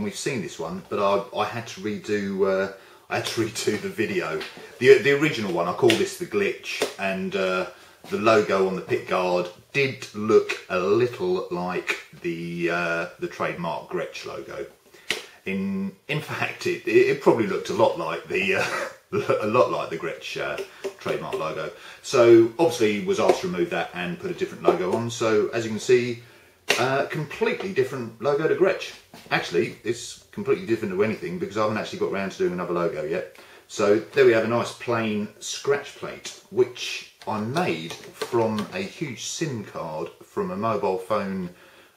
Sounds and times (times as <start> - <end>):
Speech: 0.0 - 14.8, 15.4 - 41.6.